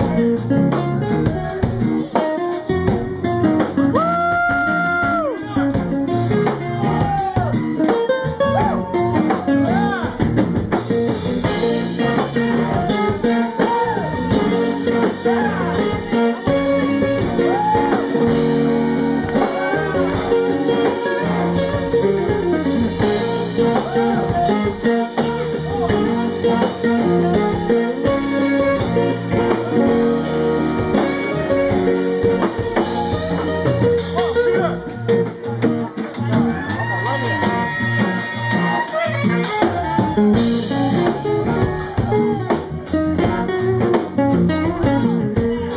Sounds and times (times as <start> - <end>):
Strum: 5.8 - 36.6.